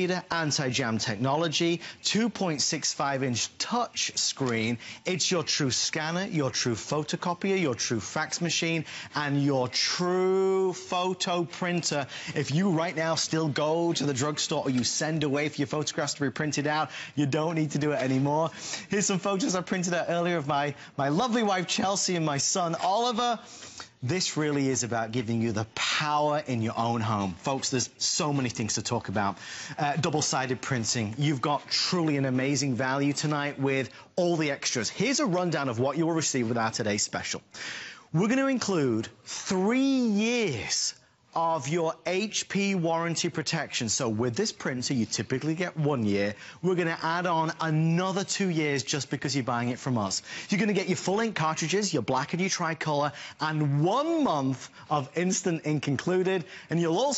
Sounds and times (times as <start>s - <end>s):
Speech: 0.0s - 57.1s.